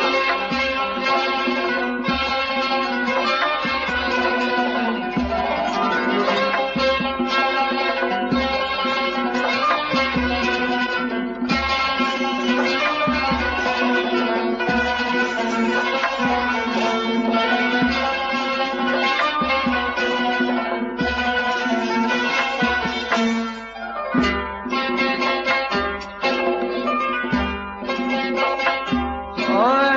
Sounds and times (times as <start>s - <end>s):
Music: 0.0s - 29.9s.